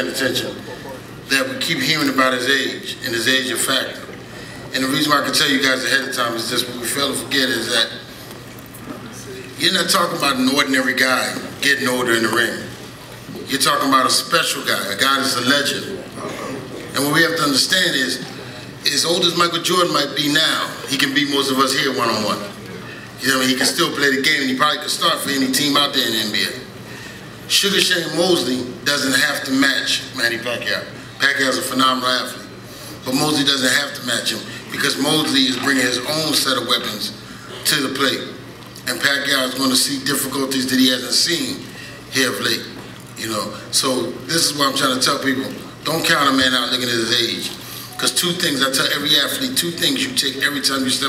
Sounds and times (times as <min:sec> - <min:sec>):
Male speech, man speaking: 0:00.0 - 0:04.1, 0:04.7 - 0:08.0, 0:09.1 - 0:12.7, 0:13.3 - 0:26.7, 0:27.5 - 0:51.0
Narration, monologue: 0:00.0 - 0:51.0.